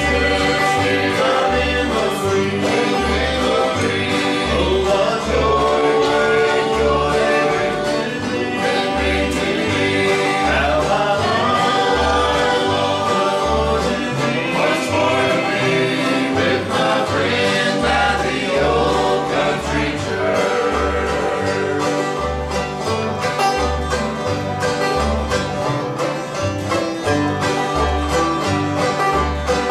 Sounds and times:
Bluegrass: 0.0 - 29.7.

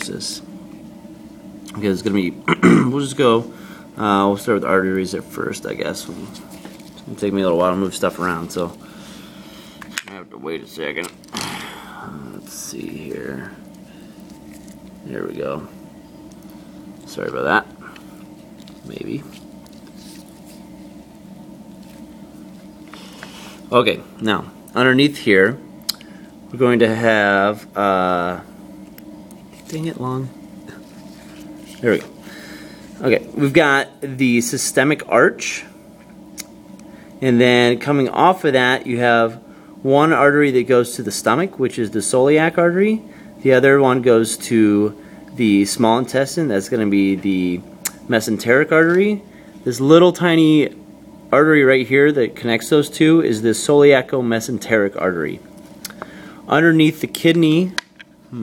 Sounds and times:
Speech: 0.0 - 0.5, 1.7 - 6.4, 7.1 - 8.8, 10.0 - 11.2, 12.1 - 13.6, 15.0 - 15.7, 17.0 - 17.7, 18.8 - 19.4, 23.7 - 25.6, 26.5 - 28.5, 29.6 - 30.4, 31.8 - 32.1, 33.0 - 35.7, 37.2 - 55.4, 56.5 - 58.4.

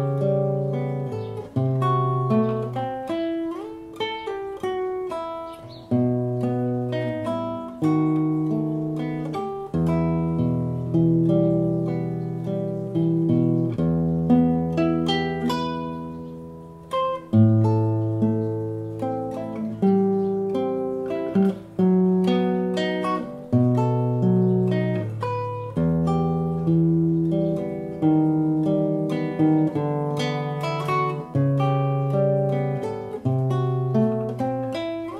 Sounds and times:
Acoustic guitar: 0.0 - 35.1.

